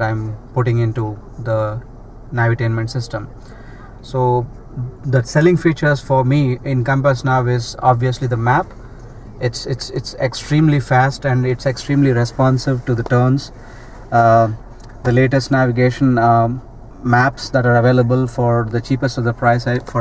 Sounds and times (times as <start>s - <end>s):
Speech: 0.0s - 3.4s, 4.0s - 8.7s, 9.4s - 20.0s.